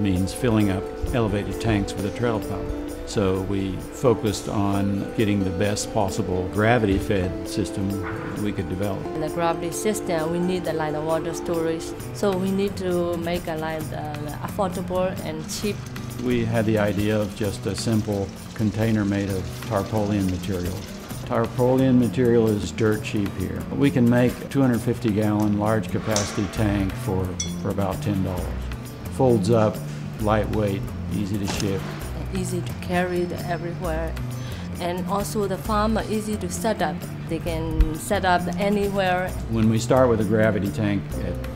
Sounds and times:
Speech: 0:00.0 - 0:28.6, 0:29.2 - 0:34.1, 0:34.8 - 0:41.4
Music: 0:00.0 - 0:41.5.

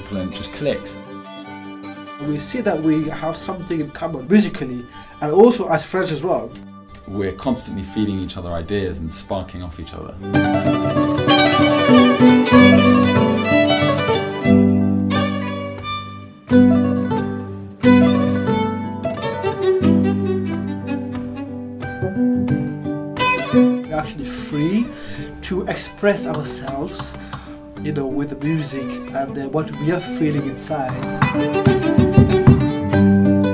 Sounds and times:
Speech: 0:00.0 - 0:01.0, 0:02.2 - 0:10.2, 0:23.9 - 0:27.2, 0:27.8 - 0:31.1
Violin, fiddle: 0:00.0 - 0:33.5.

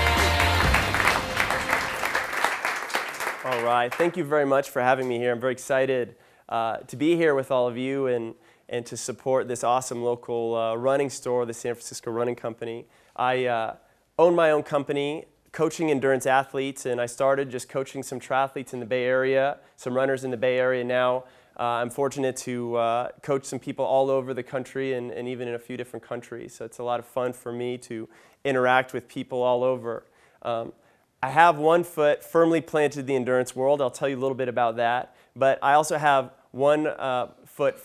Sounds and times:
Speech: 0:03.4 - 0:37.8.

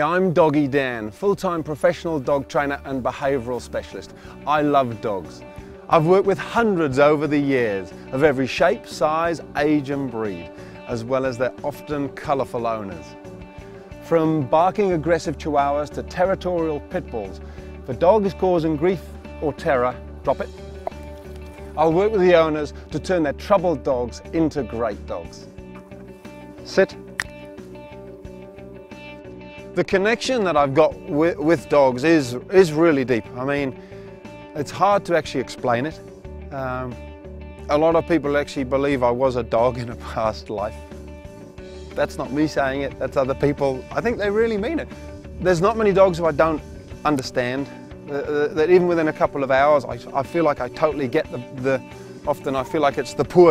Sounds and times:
Speech: 0:00.0 - 0:13.1, 0:14.0 - 0:20.5, 0:21.8 - 0:25.5, 0:26.6 - 0:27.0, 0:29.8 - 0:33.8, 0:34.6 - 0:37.0, 0:37.7 - 0:40.8, 0:42.0 - 0:53.5
Music: 0:00.0 - 0:53.5.

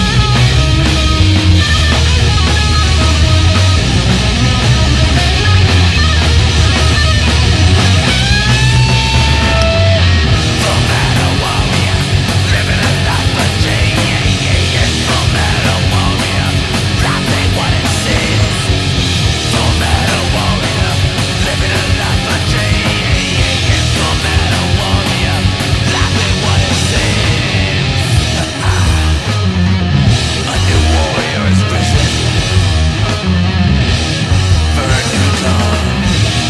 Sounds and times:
Heavy metal: 0:00.0 - 0:36.4.

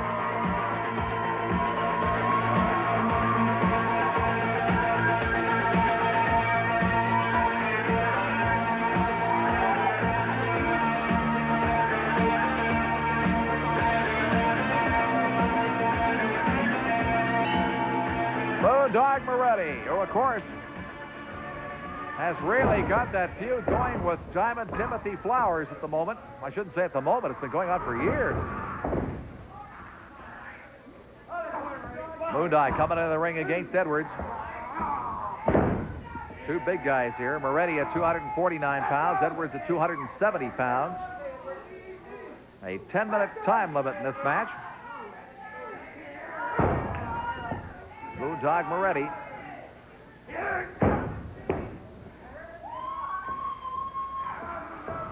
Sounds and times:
Music: 0:00.0 - 0:25.8.

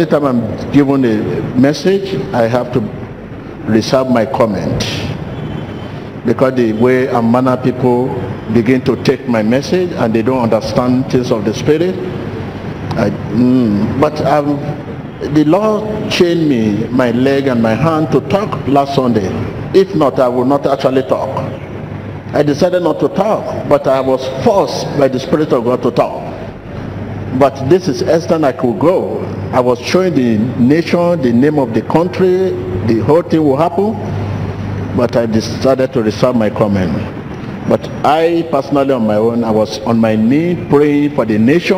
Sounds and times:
Speech: 0:00.0 - 0:03.0, 0:03.7 - 0:05.2, 0:06.2 - 0:12.1, 0:12.9 - 0:21.6, 0:22.3 - 0:26.5, 0:27.3 - 0:34.1, 0:34.9 - 0:37.1, 0:37.7 - 0:41.7.

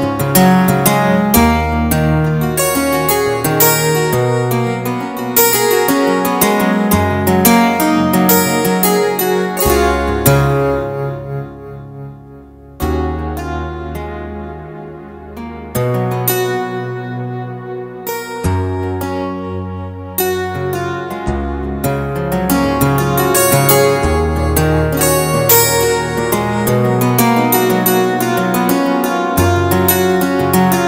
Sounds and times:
Music: 0:00.0 - 0:30.8.

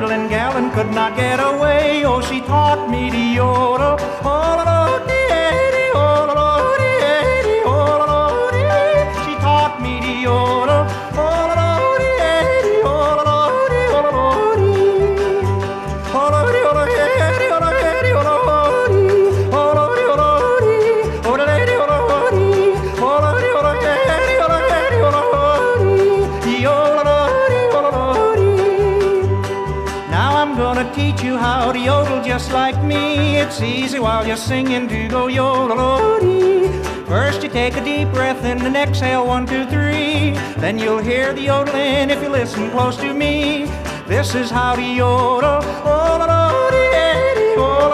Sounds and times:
Folk music: 0:00.0 - 0:47.9.

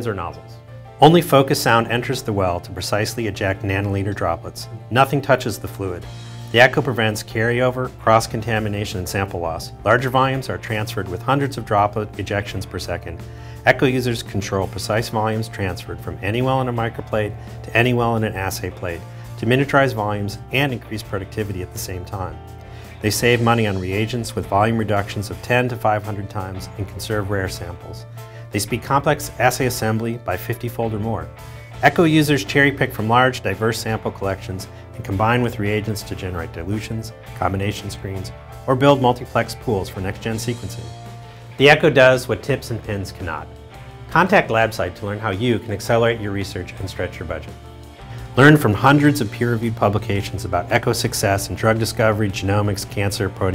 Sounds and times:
Speech: 0:00.0 - 0:22.4, 0:23.0 - 0:41.0, 0:41.6 - 0:43.5, 0:44.1 - 0:47.6, 0:48.4 - 0:53.5
Music: 0:00.0 - 0:53.5.

